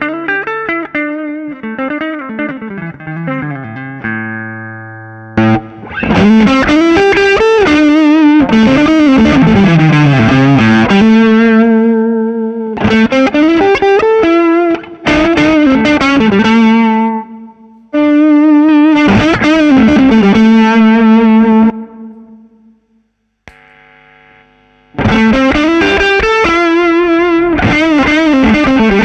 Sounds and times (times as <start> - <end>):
Distortion: 0.0 - 29.0
Effects unit: 0.0 - 29.0
Guitar: 0.0 - 29.0.